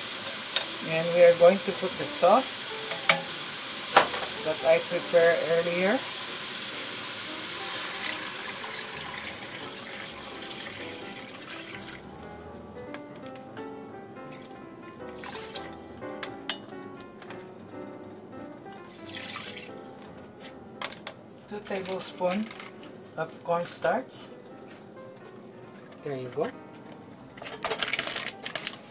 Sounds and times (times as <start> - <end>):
Music: 0.0 - 28.9
Speech: 0.8 - 2.5, 4.4 - 6.0, 21.5 - 22.5, 23.2 - 24.3, 26.0 - 26.6.